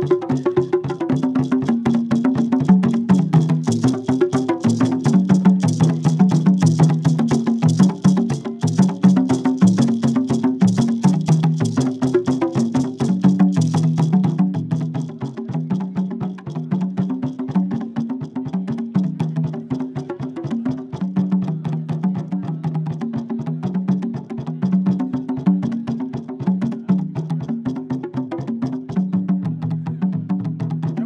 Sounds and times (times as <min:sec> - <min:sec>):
Drum: 0:00.0 - 0:31.0.